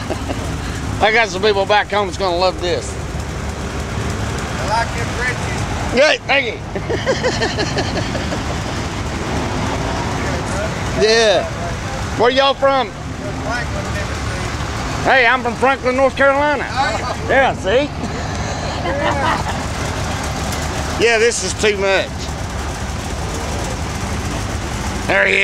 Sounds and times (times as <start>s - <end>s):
Truck: 0.0s - 25.4s.